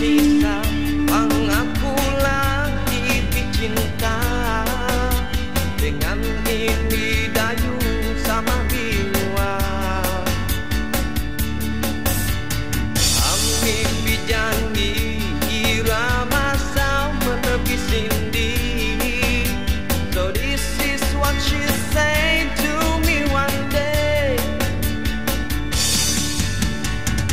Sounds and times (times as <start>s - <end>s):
Music: 0.0s - 27.3s.